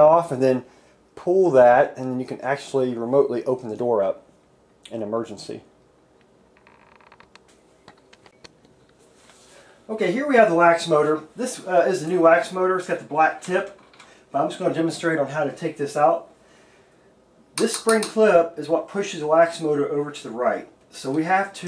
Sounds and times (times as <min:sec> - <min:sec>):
Speech: 0:00.0 - 0:04.2, 0:04.9 - 0:05.7, 0:09.9 - 0:16.3, 0:17.6 - 0:21.6.